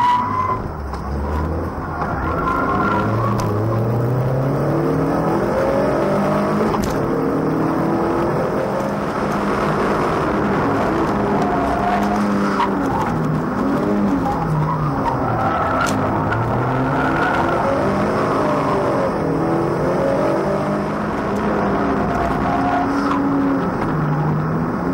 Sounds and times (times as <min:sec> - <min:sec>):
Race car, auto racing: 0:00.0 - 0:24.9.